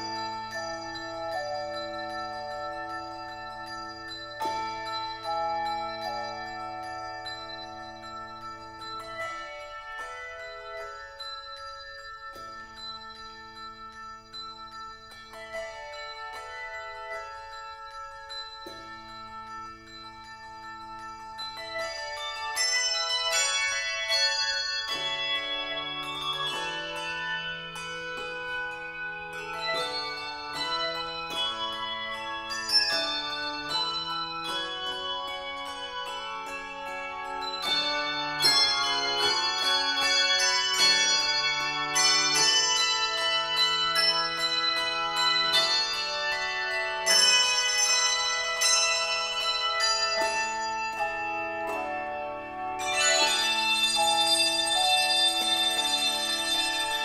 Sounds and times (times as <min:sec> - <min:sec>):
Inside, large room or hall: 0:00.0 - 0:57.0
Music: 0:00.0 - 0:57.0.